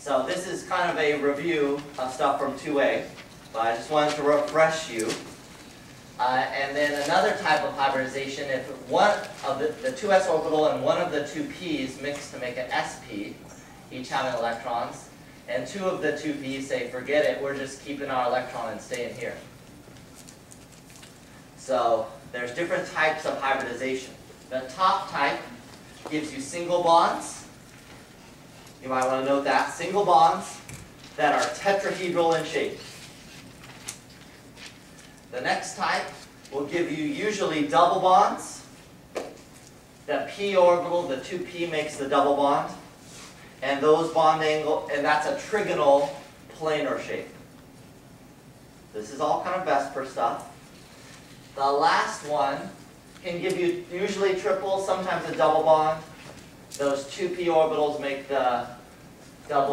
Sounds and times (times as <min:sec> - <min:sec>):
Speech: 0:00.0 - 0:05.4, 0:06.2 - 0:19.5, 0:21.6 - 0:27.6, 0:28.8 - 0:33.0, 0:35.3 - 0:38.8, 0:40.1 - 0:43.0, 0:43.6 - 0:47.4, 0:48.9 - 0:50.6, 0:51.5 - 0:58.9, 0:59.5 - 0:59.7.